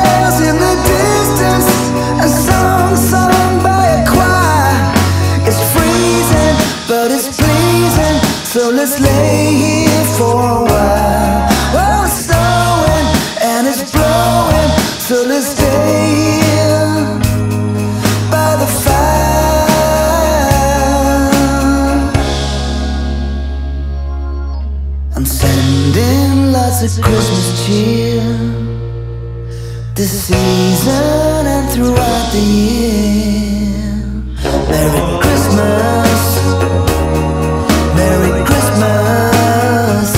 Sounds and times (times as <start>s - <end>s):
Christmas music: 0.0s - 40.1s.